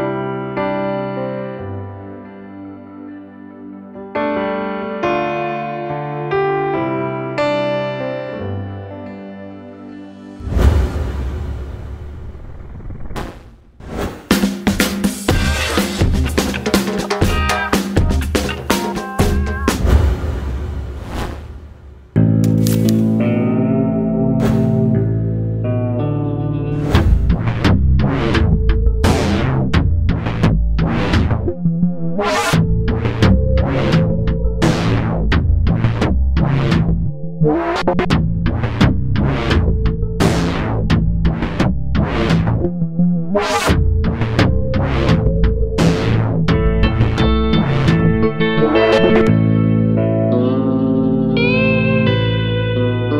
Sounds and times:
Music: 0.0 - 11.6, 14.1 - 21.2, 21.8 - 53.1.

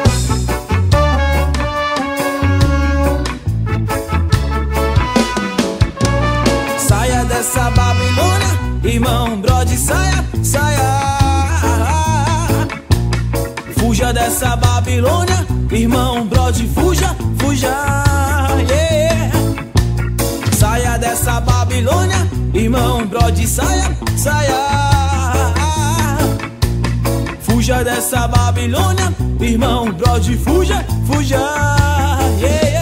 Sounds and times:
Pop music: 0.0 - 32.8.

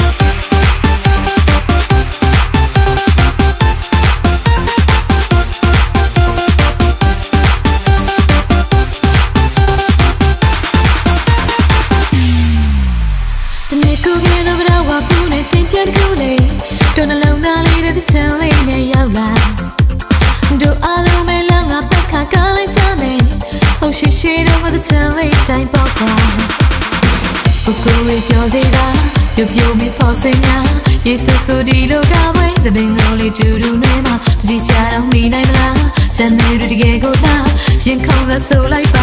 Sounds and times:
Music: 0.0 - 39.0.

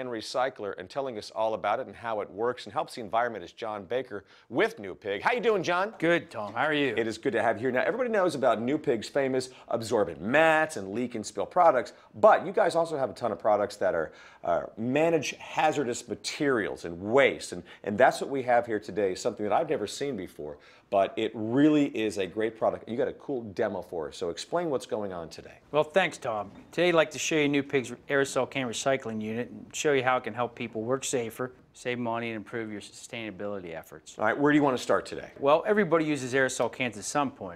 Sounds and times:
Speech: 0.0 - 37.5.

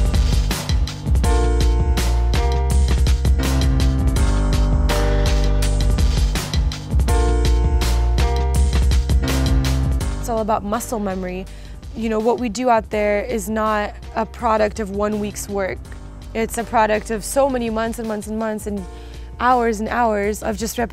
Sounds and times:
Music: 0.0 - 20.9
Speech: 10.3 - 11.4, 12.0 - 15.8, 16.4 - 18.8, 19.4 - 20.9.

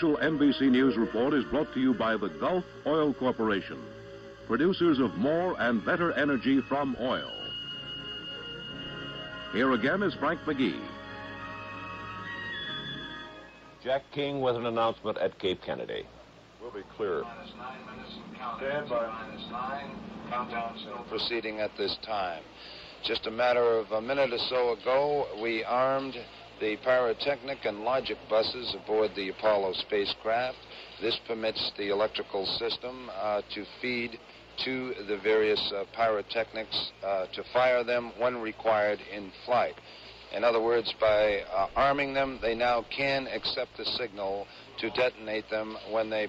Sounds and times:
Speech: 0.0 - 3.8, 4.5 - 7.4, 9.6 - 10.9, 13.8 - 46.2.

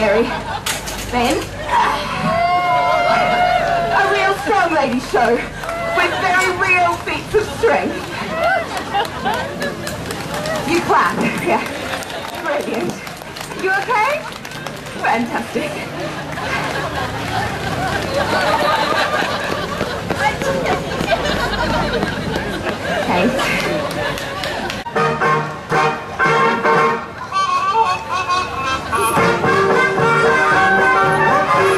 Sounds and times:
Outside, urban or manmade: 0.0 - 31.7.

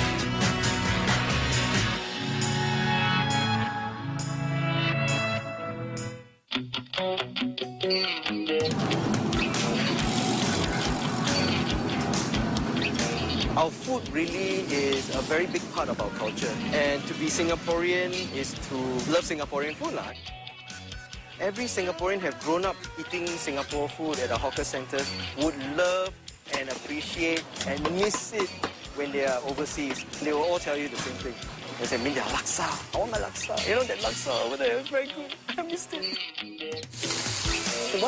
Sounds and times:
Music: 0.0 - 38.0
Speech: 13.6 - 20.2, 21.4 - 36.2.

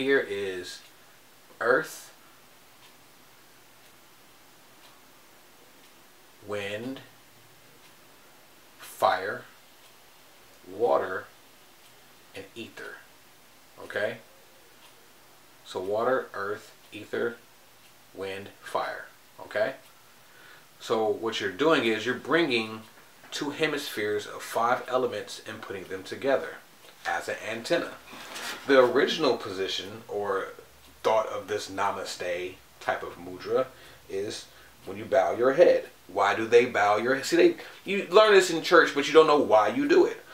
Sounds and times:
Speech: 0.0 - 0.9, 1.6 - 2.2, 6.4 - 7.1, 8.8 - 9.6, 10.6 - 11.4, 12.4 - 13.1, 13.8 - 14.3, 15.6 - 17.4, 18.2 - 19.8, 20.8 - 40.3
Inside, small room: 0.0 - 40.3.

